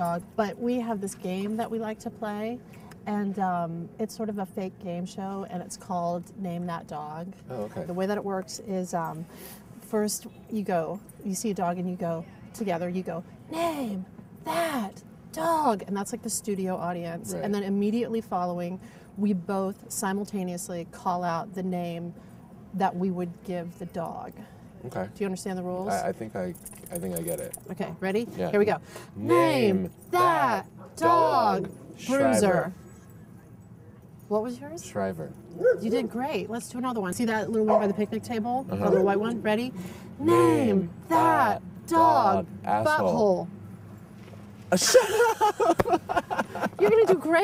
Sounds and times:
Outside, urban or manmade: 0.0s - 47.4s.

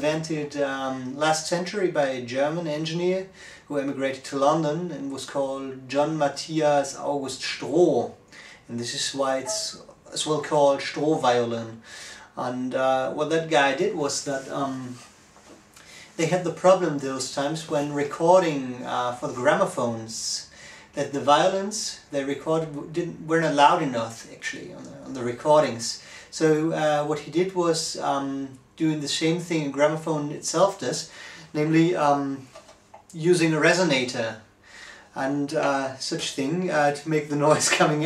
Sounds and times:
Speech: 0.0s - 11.8s, 12.4s - 15.1s, 16.1s - 34.5s, 35.1s - 38.0s.

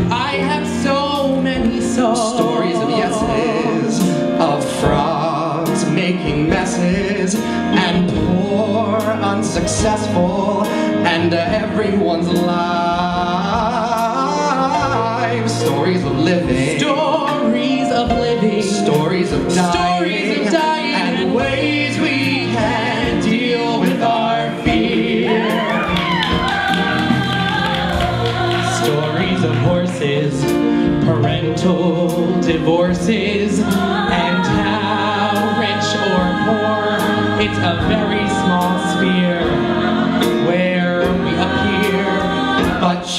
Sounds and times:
Music: 0.0s - 43.1s.

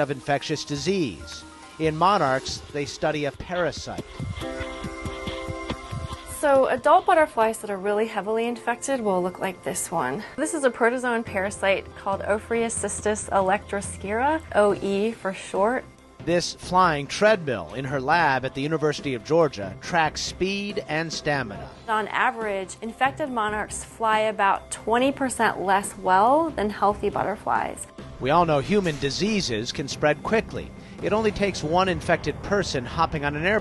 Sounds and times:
Speech: 0.0s - 4.0s, 6.4s - 9.3s, 16.3s - 33.6s
Music: 0.0s - 33.6s.

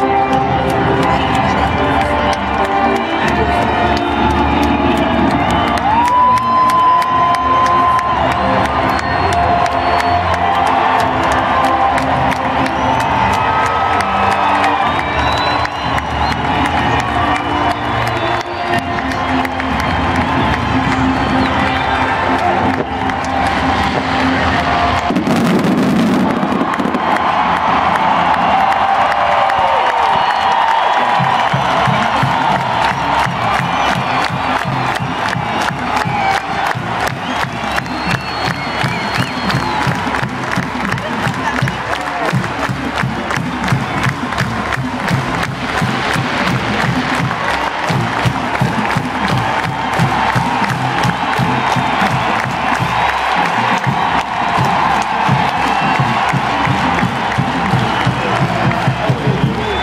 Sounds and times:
Music: 0.0s - 59.8s.

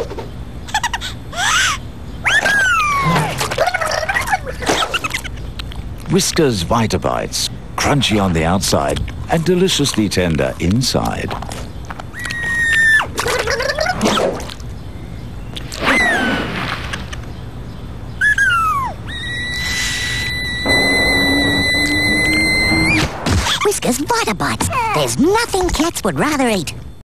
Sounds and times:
Speech: 6.1s - 11.4s, 23.6s - 26.8s.

